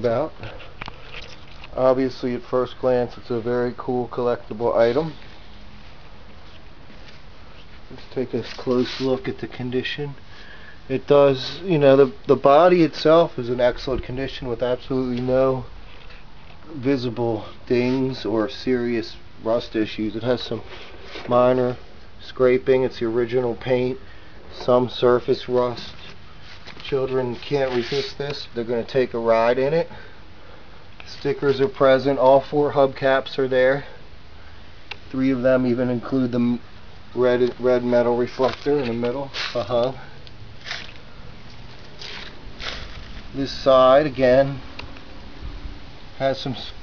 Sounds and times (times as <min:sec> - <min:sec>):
Speech: 0:00.0 - 0:00.5, 0:01.8 - 0:05.2, 0:07.9 - 0:10.2, 0:10.9 - 0:15.7, 0:16.7 - 0:20.7, 0:21.3 - 0:26.2, 0:26.8 - 0:30.0, 0:31.0 - 0:34.0, 0:35.1 - 0:36.6, 0:37.2 - 0:40.1, 0:43.4 - 0:44.6, 0:46.2 - 0:46.8.